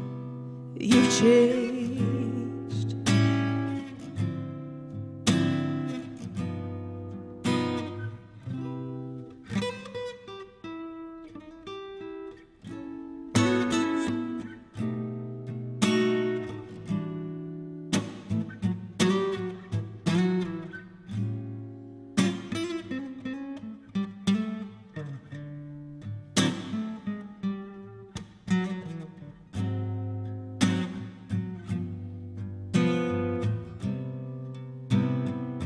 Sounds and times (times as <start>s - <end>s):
Singing: 0.8s - 3.0s.